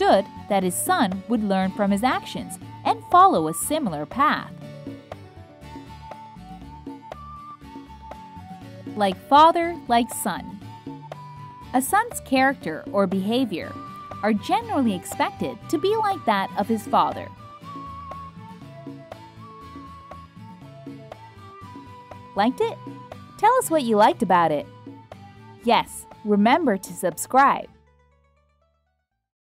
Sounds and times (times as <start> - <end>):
Speech: 0.0 - 4.5, 9.0 - 10.6, 11.8 - 17.3, 22.4 - 22.8, 23.4 - 24.6, 25.7 - 27.7
Music for children: 0.0 - 29.0.